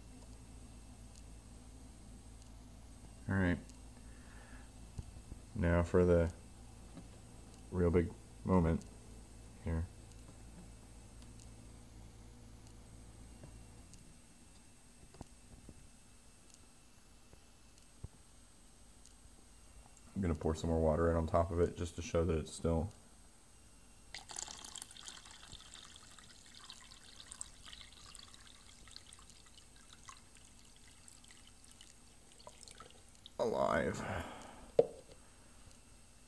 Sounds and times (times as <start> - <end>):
Speech: 3.2 - 3.7, 5.6 - 6.4, 7.7 - 8.8, 9.6 - 9.9, 20.2 - 23.0, 33.4 - 34.3.